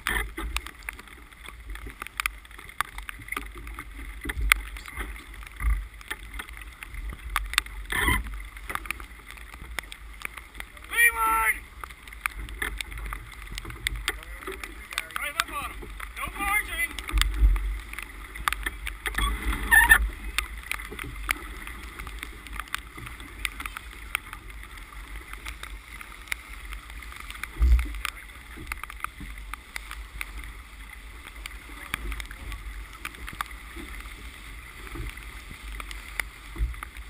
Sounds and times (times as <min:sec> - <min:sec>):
Sailboat, sailing ship: 0:00.0 - 0:37.0
Speech: 0:10.9 - 0:11.6, 0:14.2 - 0:17.0.